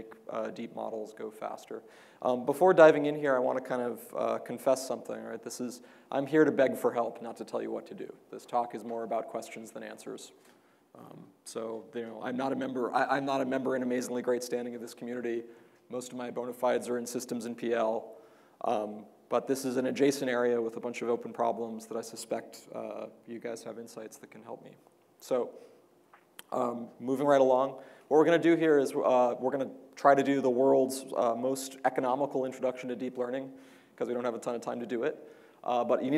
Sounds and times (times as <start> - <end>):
Speech: 0.0 - 10.4, 11.0 - 25.6, 26.4 - 36.1.